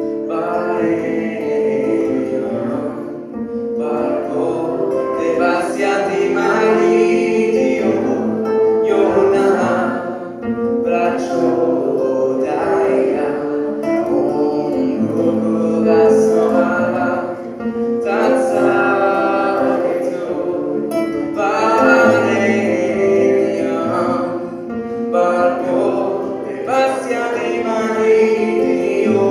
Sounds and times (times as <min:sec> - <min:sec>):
Vocal music: 0:00.0 - 0:29.3.